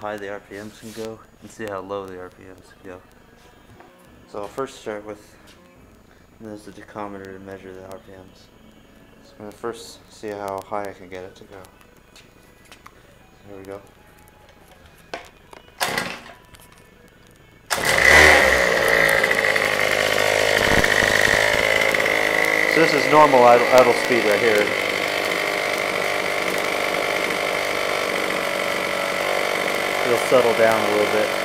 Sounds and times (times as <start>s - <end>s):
Speech: 0.0s - 3.0s, 4.3s - 5.3s, 6.4s - 8.5s, 9.2s - 11.7s, 13.4s - 13.9s, 22.7s - 24.8s, 30.0s - 31.4s
Idling: 17.7s - 31.4s
Medium engine (mid frequency): 17.7s - 31.4s
Vehicle: 17.7s - 31.4s
Accelerating, revving, vroom: 17.8s - 18.8s.